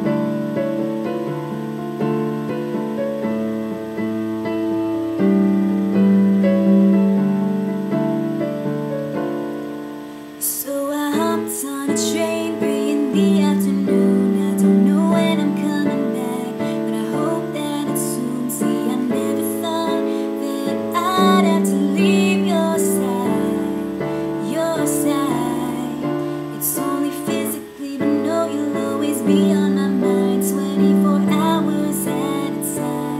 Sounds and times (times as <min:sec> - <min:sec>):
Music: 0:00.0 - 0:33.2
Female singing: 0:10.4 - 0:33.2.